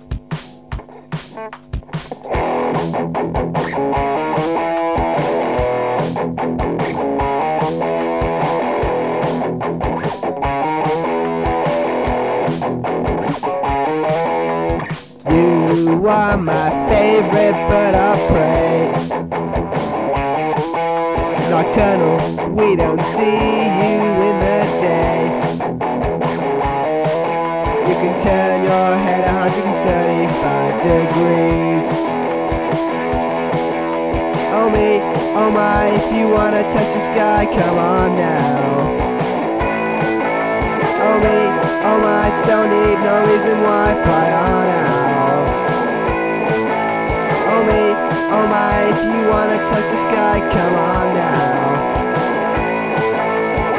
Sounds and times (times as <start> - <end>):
Rhythm and blues: 0.0 - 53.7.